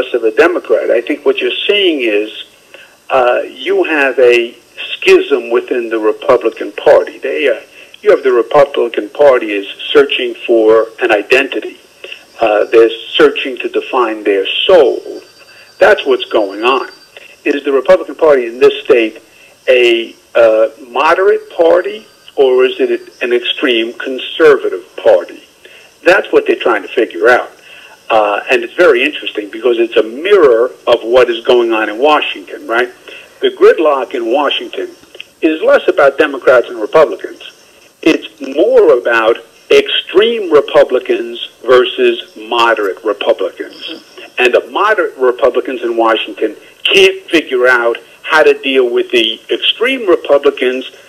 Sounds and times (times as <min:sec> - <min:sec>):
Speech: 0:00.0 - 0:02.5, 0:03.1 - 0:15.2, 0:15.8 - 0:51.0.